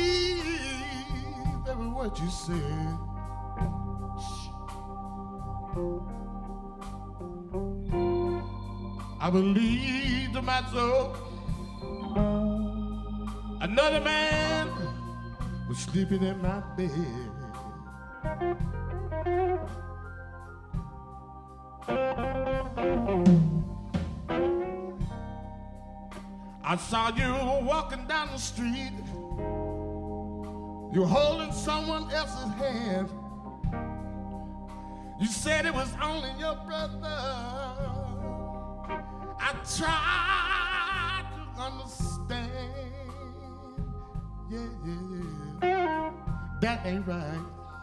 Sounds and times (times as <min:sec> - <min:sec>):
Music: 0:00.0 - 0:47.8.